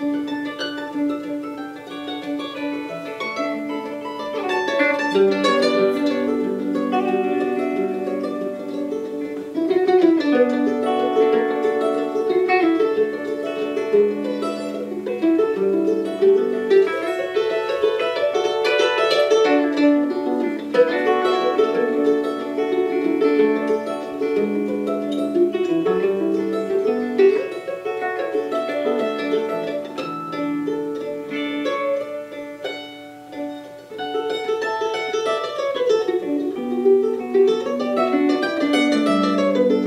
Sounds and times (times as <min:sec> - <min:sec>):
Ukulele: 0:00.0 - 0:39.8.